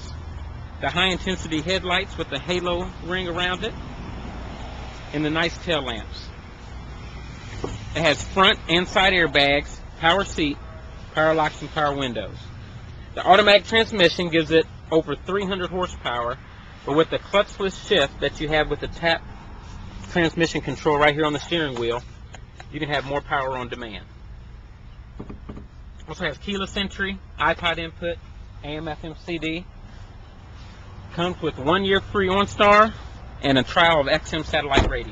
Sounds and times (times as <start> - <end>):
Speech: 0.8 - 3.8, 5.1 - 6.3, 8.0 - 12.5, 13.2 - 19.2, 20.1 - 22.1, 22.7 - 24.1, 26.0 - 29.7, 31.1 - 35.1.